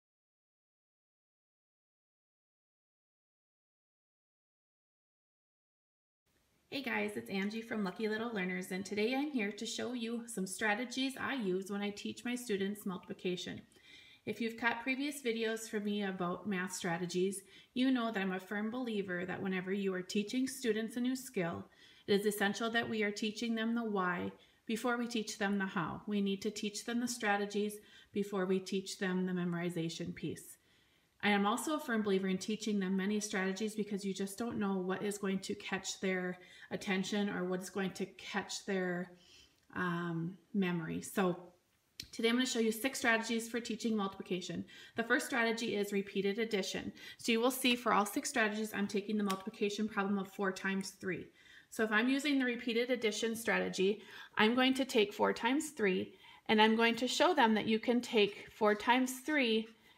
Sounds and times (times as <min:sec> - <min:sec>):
Speech: 0:06.7 - 0:13.7, 0:14.3 - 0:30.6, 0:31.2 - 0:39.1, 0:39.7 - 0:59.7.